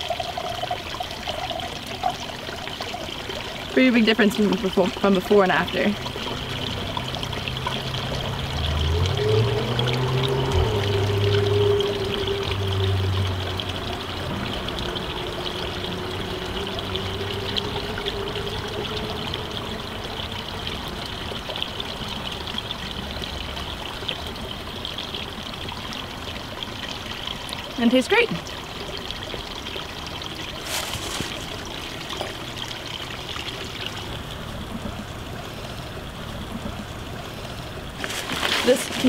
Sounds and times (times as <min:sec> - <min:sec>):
Water: 0:00.0 - 0:39.0
Speech: 0:03.8 - 0:06.0, 0:27.8 - 0:28.4.